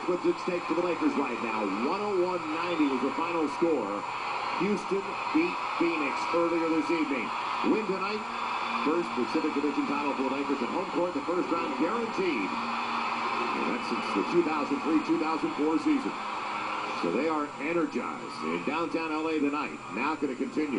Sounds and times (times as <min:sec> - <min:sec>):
Speech: 0:00.0 - 0:04.0, 0:04.6 - 0:08.2, 0:08.9 - 0:12.5, 0:17.0 - 0:20.7.